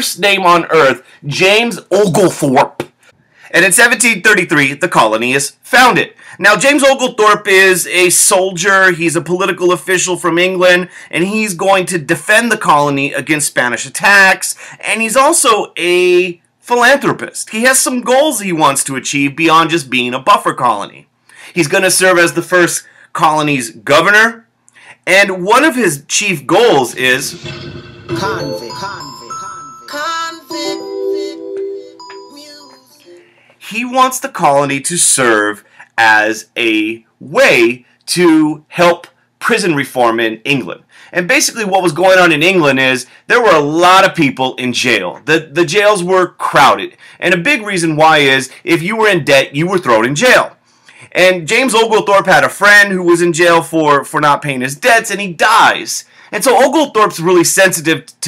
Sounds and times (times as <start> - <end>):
Speech: 0.0 - 2.9, 3.5 - 27.4, 28.2 - 29.8, 33.6 - 58.2
Glockenspiel: 27.5 - 33.4.